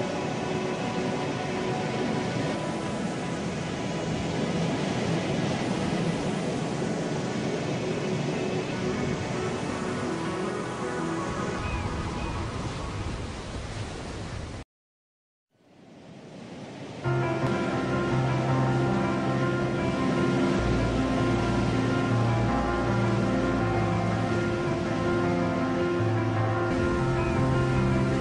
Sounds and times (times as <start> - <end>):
Music: 0.0 - 12.9, 17.1 - 28.2
Motorboat, speedboat: 17.5 - 28.2.